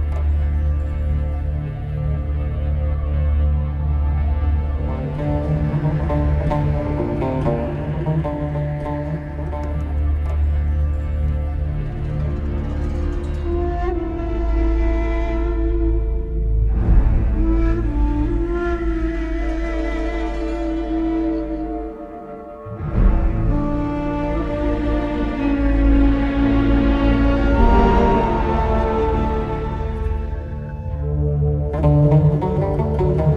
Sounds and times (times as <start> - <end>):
Background music: 0.0 - 33.3.